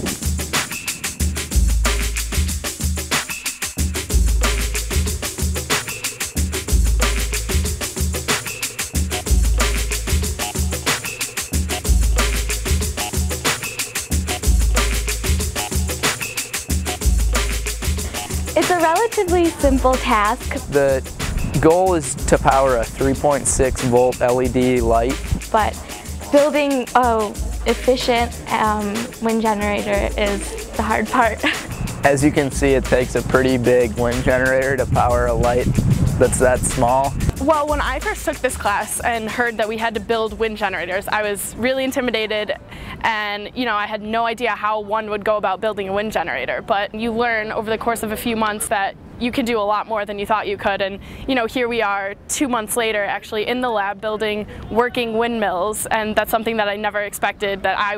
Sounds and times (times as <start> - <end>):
Music: 0.0 - 48.6.